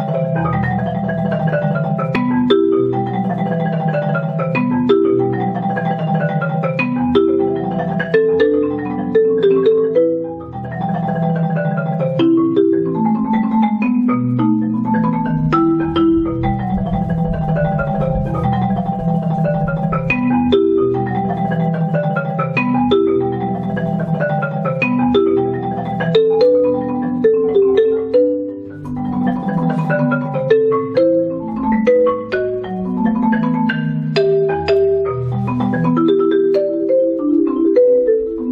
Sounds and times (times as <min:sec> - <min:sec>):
Marimba, xylophone: 0:00.0 - 0:38.5.